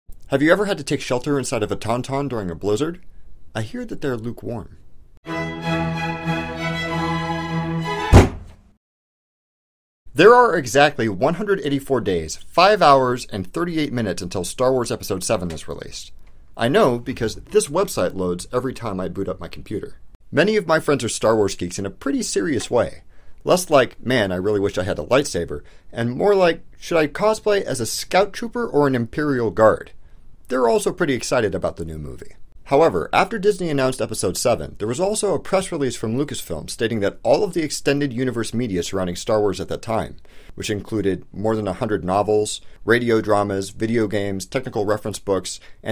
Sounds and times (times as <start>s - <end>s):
Speech: 0.3s - 4.8s, 10.1s - 45.9s
Music: 5.2s - 8.5s.